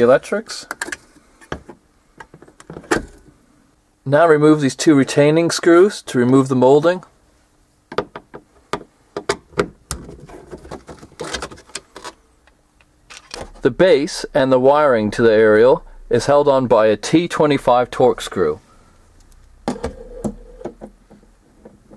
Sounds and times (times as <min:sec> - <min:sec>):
Speech: 0:00.0 - 0:00.7, 0:04.0 - 0:07.1, 0:13.6 - 0:18.6.